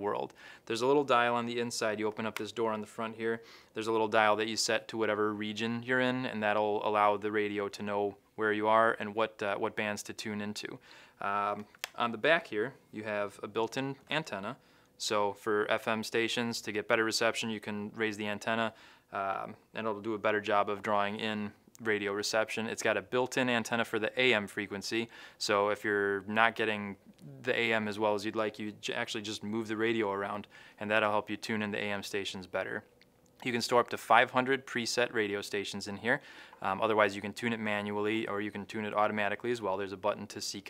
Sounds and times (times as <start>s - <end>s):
Speech: 0.0s - 40.6s.